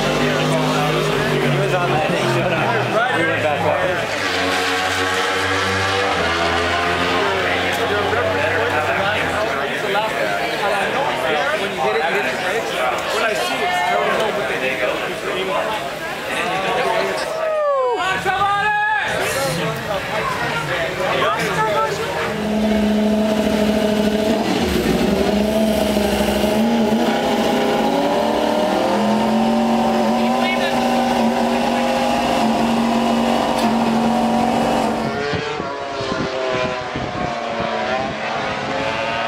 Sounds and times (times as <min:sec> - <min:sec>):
Motorcycle: 0:00.0 - 0:10.0, 0:19.3 - 0:39.2
Race car, auto racing: 0:00.0 - 0:39.2.